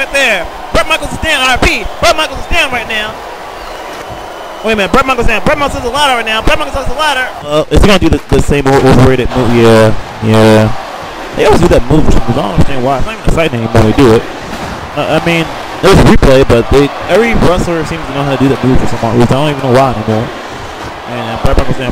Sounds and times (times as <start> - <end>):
Speech: 0.0 - 3.2, 4.6 - 10.8, 11.4 - 14.2, 15.0 - 20.3, 21.1 - 21.9.